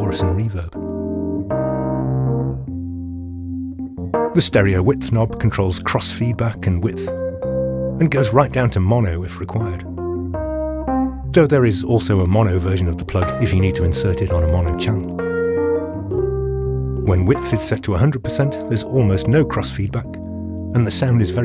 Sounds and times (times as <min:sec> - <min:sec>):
Speech: 0:00.0 - 0:00.8, 0:04.4 - 0:07.1, 0:08.0 - 0:09.9, 0:11.3 - 0:15.1, 0:17.0 - 0:21.4
Music: 0:00.0 - 0:21.4.